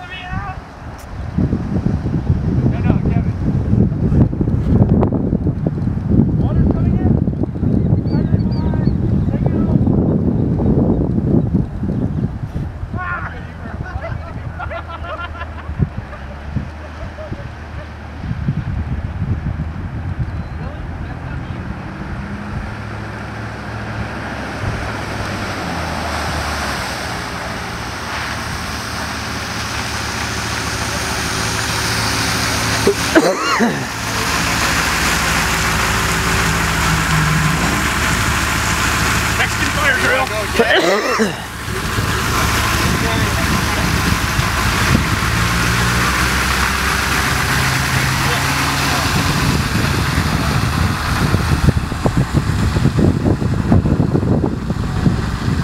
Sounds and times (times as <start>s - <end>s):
Speech: 2.7s - 3.4s, 6.4s - 7.2s, 8.1s - 9.8s, 13.0s - 14.6s, 20.6s - 21.7s, 39.4s - 41.1s, 42.8s - 43.9s.